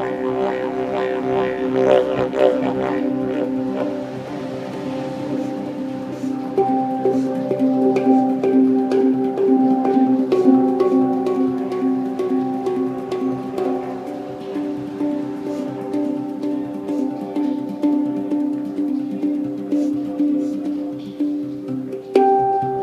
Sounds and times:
Didgeridoo: 0.0s - 22.8s.

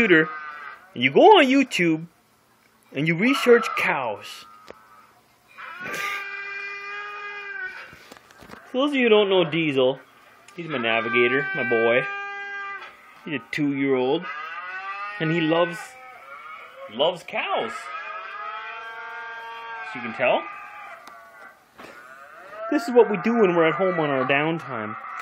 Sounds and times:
Speech: 1.0s - 2.1s, 3.0s - 4.5s, 8.7s - 12.1s, 13.3s - 14.3s, 16.8s - 17.9s, 19.9s - 20.5s, 22.7s - 25.0s
Domestic animals, pets: 14.3s - 16.9s, 17.7s - 19.9s, 20.5s - 22.7s, 24.8s - 25.2s.

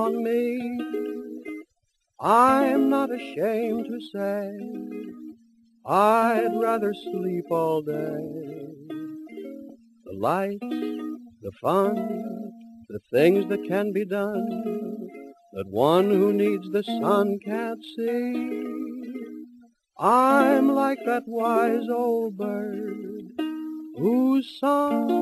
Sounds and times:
Music: 0.0s - 25.2s.

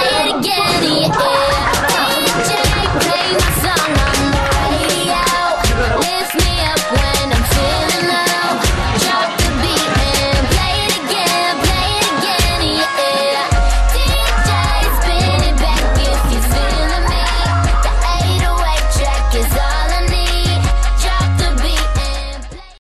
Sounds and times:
Music: 0.0s - 22.8s.

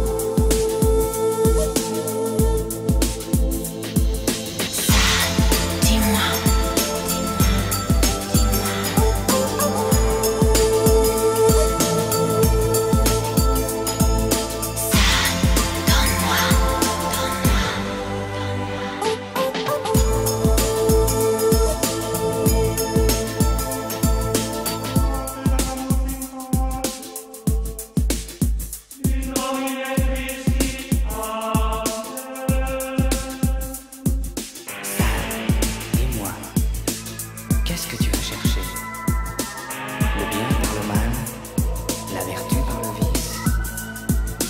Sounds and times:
Music: 0.0s - 44.5s.

